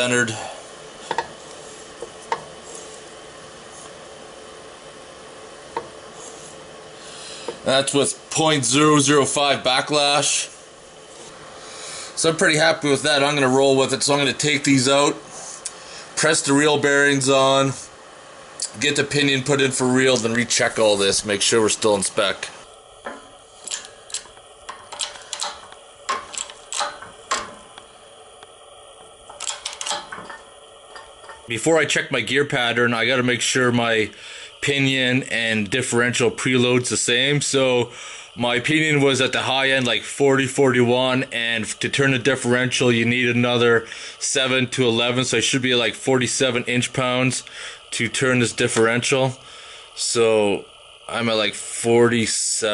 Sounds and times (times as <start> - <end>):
Speech: 0.0 - 0.5, 7.6 - 10.6, 12.2 - 15.2, 16.2 - 17.9, 18.6 - 22.6, 31.5 - 49.4, 50.0 - 52.7.